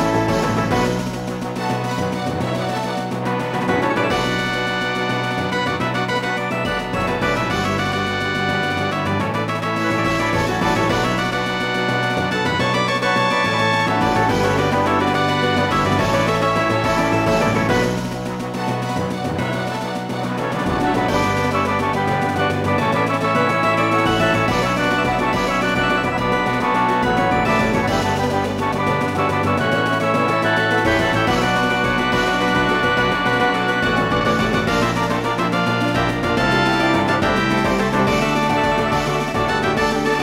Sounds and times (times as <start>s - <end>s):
Music: 0.0s - 40.2s.